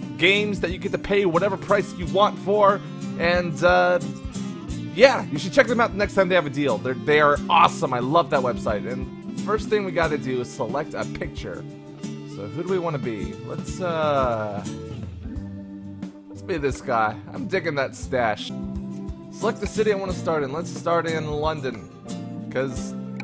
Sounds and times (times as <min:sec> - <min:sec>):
Music: 0:00.0 - 0:23.2
Speech: 0:00.2 - 0:04.1, 0:05.0 - 0:11.6, 0:12.3 - 0:14.8, 0:16.4 - 0:18.5, 0:19.4 - 0:21.9, 0:22.5 - 0:23.0.